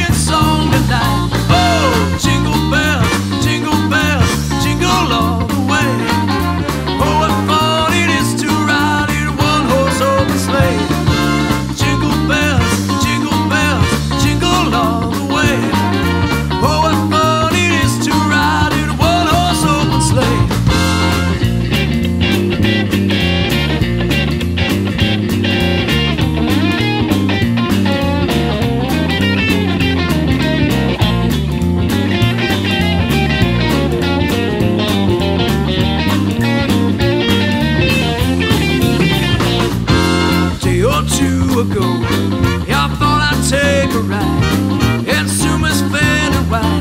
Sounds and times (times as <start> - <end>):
Jingle (music): 0.2 - 22.5, 36.1 - 46.8.